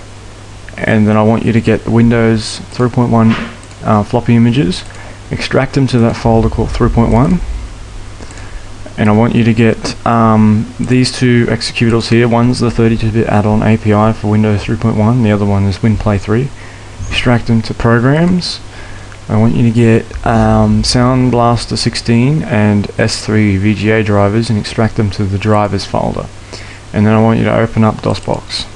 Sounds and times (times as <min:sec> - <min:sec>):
Speech: 0:00.7 - 0:07.5, 0:08.9 - 0:18.7, 0:19.3 - 0:28.7.